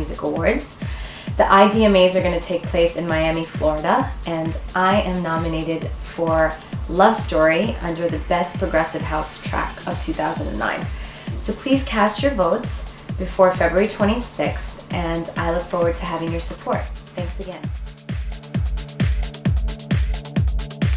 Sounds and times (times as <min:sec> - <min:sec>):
Music: 0:00.0 - 0:20.9
Speech: 0:01.4 - 0:10.8, 0:11.5 - 0:17.7.